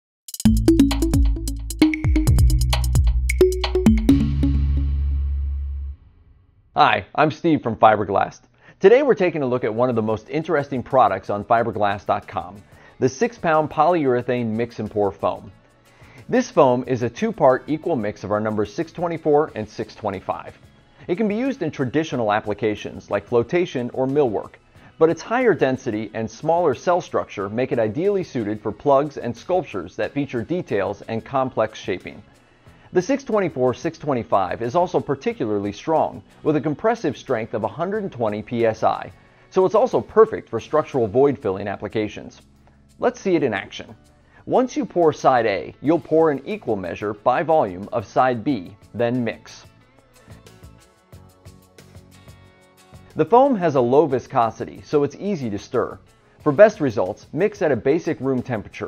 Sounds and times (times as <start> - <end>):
Music: 0.3 - 58.8
Speech: 6.8 - 15.5, 16.3 - 32.2, 33.0 - 42.4, 43.0 - 49.7, 53.2 - 58.8.